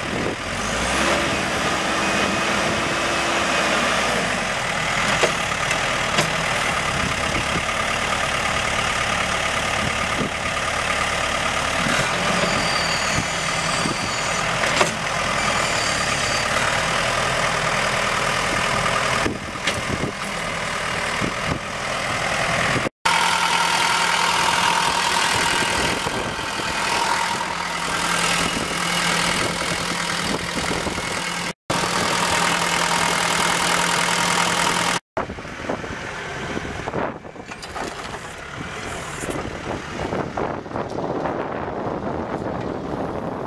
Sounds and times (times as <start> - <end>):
Vehicle: 0.0 - 43.4
Idling: 16.9 - 35.0.